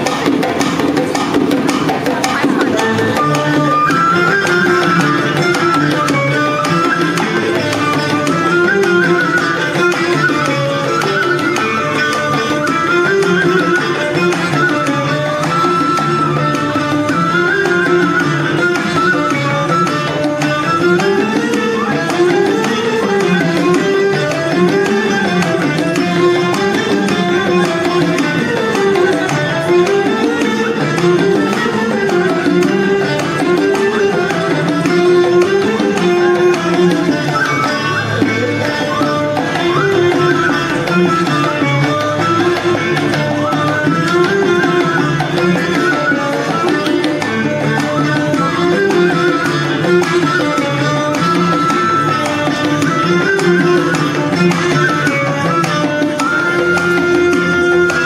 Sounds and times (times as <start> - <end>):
Traditional music: 0.0 - 58.0.